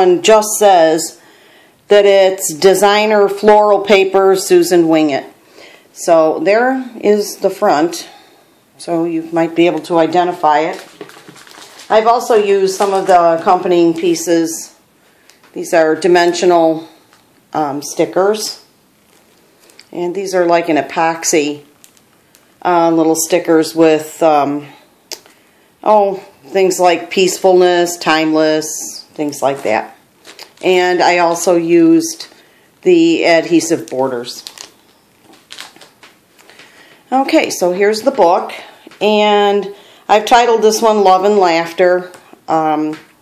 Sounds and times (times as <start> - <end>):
Speech: 0.0 - 1.2, 1.9 - 5.4, 6.0 - 8.2, 8.8 - 10.9, 11.9 - 14.8, 15.6 - 18.7, 19.9 - 21.7, 22.6 - 24.8, 25.8 - 30.0, 30.6 - 34.5, 37.1 - 43.1.